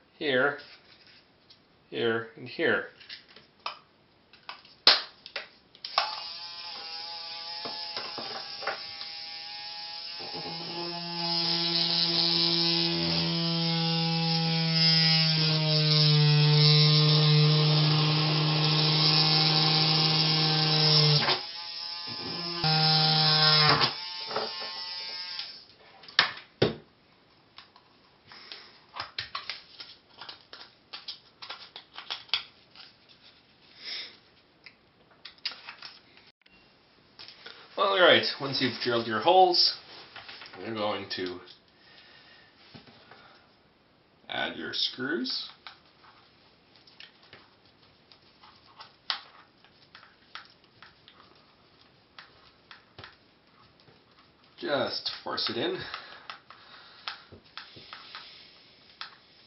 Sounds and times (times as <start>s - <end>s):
Speech: 0.2s - 0.7s, 1.9s - 3.0s, 37.8s - 39.8s, 40.6s - 41.5s, 44.3s - 45.6s, 54.6s - 55.9s.